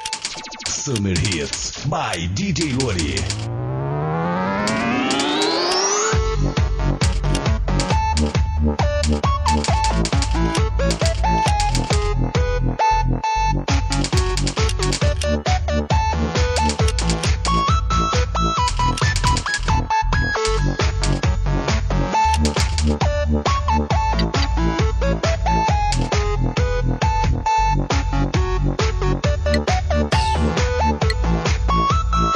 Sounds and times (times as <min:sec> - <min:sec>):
Music: 0:00.0 - 0:32.3.